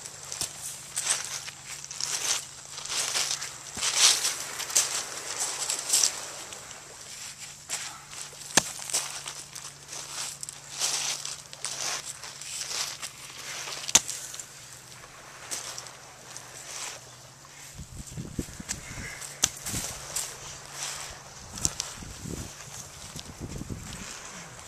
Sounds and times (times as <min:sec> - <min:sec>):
Outside, rural or natural: 0:00.0 - 0:24.6.